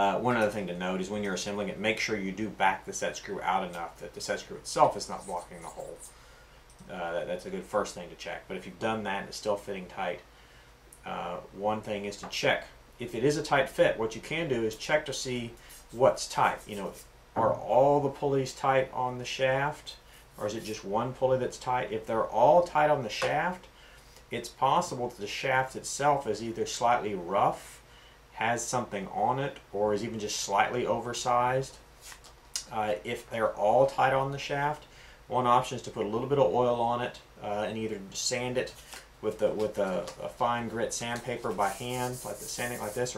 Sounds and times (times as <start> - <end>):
Speech: 0.0 - 6.1, 6.8 - 10.3, 11.0 - 23.7, 24.3 - 27.8, 28.4 - 31.8, 32.6 - 43.1.